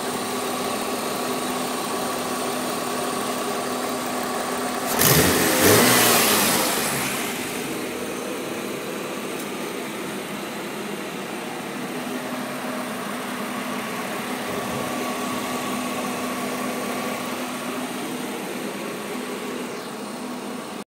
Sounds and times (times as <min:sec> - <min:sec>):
Idling: 0:00.0 - 0:20.8
Medium engine (mid frequency): 0:00.0 - 0:20.8
Vehicle: 0:00.0 - 0:20.8.